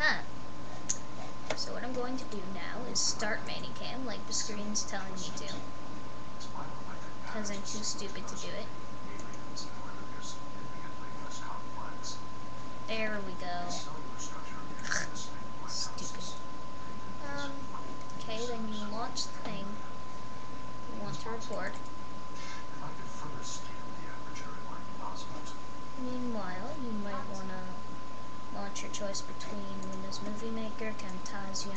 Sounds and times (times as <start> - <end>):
Speech: 0.0 - 0.3, 1.5 - 5.7, 6.4 - 12.3, 12.9 - 20.0, 20.8 - 27.9, 28.5 - 31.7.